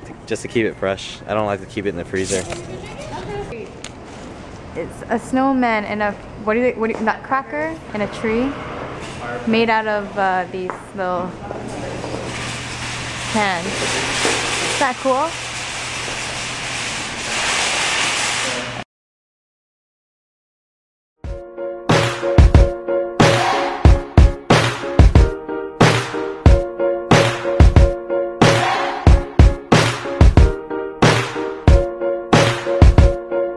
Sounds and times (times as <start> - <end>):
Inside, public space: 0.0 - 14.8
Speech: 14.8 - 15.3.